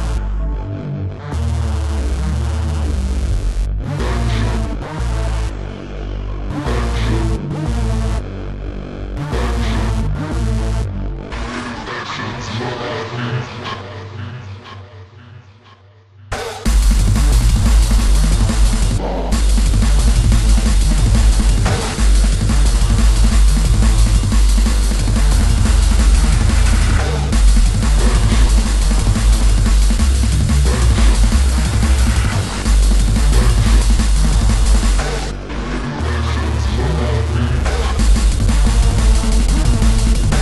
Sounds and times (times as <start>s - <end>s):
Bass drum: 16.4s - 35.5s, 36.6s - 40.4s
Drum kit: 16.4s - 35.6s, 37.6s - 40.4s.